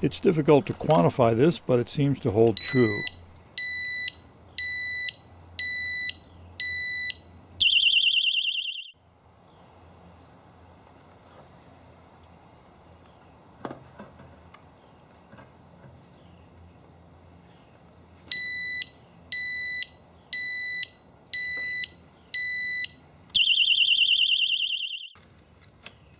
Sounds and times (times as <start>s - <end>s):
Alarm: 2.6s - 9.0s, 18.3s - 25.2s.